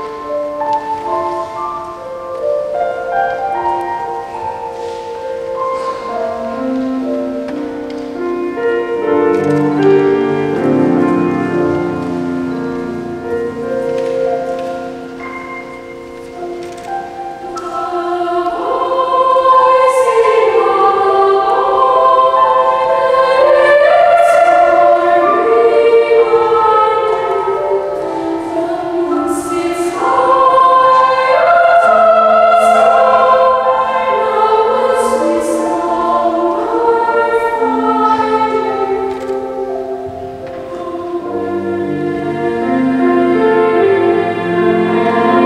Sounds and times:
Music: 0:00.0 - 0:45.4.

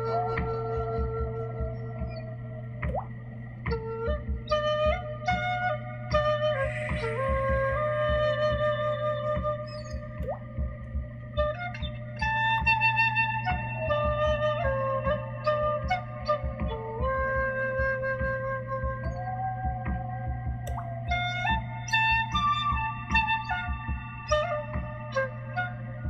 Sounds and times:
Flute: 0:00.0 - 0:26.0.

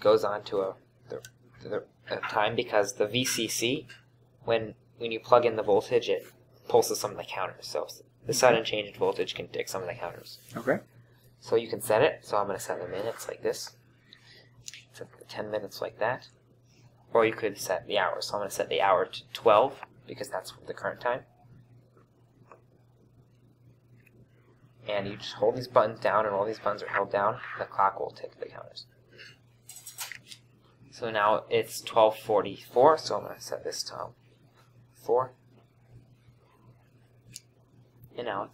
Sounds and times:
Speech: 0:00.0 - 0:10.8, 0:11.4 - 0:13.8, 0:14.9 - 0:16.3, 0:17.1 - 0:21.3, 0:24.8 - 0:28.9, 0:30.9 - 0:34.2, 0:35.0 - 0:35.4, 0:38.1 - 0:38.5.

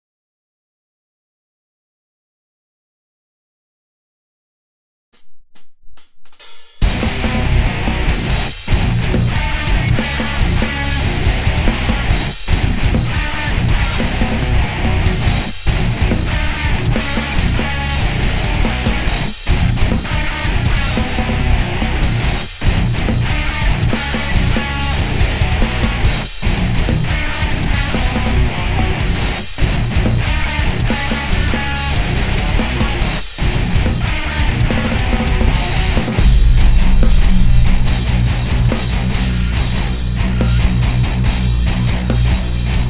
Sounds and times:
Drum machine: 0:05.2 - 0:07.2, 0:36.2 - 0:39.2
Drum: 0:05.2 - 0:42.4.

